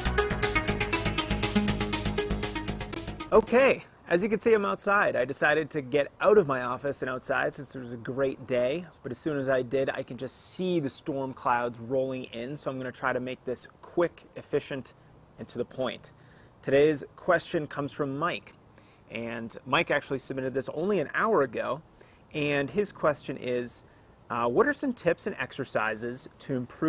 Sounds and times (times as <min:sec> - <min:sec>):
Outside, urban or manmade: 0:00.0 - 0:26.8
Speech: 0:03.3 - 0:26.8.